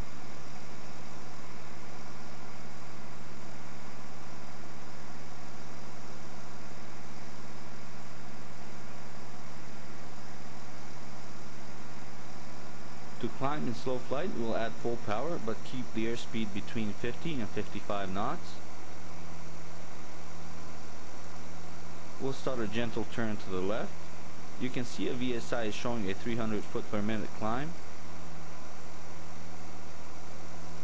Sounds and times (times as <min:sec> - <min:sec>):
Speech: 0:13.2 - 0:18.6, 0:22.2 - 0:24.0, 0:24.6 - 0:27.8.